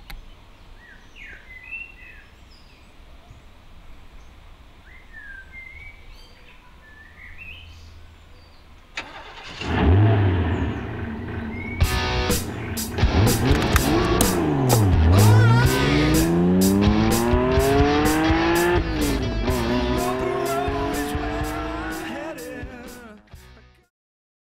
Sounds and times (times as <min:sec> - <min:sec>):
Medium engine (mid frequency): 0:08.9 - 0:21.7
Car: 0:08.9 - 0:21.8
Accelerating, revving, vroom: 0:09.5 - 0:11.4, 0:13.1 - 0:22.0
Music: 0:11.8 - 0:23.9.